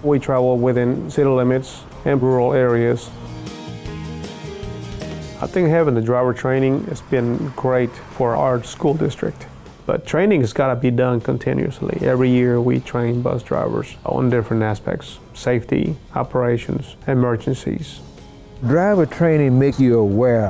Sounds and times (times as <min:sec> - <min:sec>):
Speech: 0:00.0 - 0:03.2, 0:05.4 - 0:18.0, 0:18.6 - 0:20.5
Music: 0:00.0 - 0:20.5.